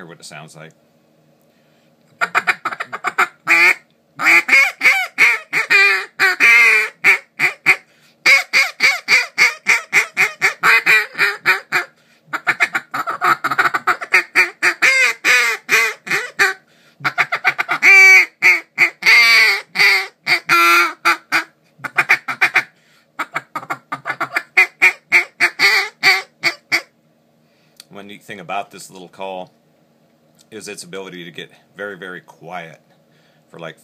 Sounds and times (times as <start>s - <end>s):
Quack: 2.2s - 26.9s.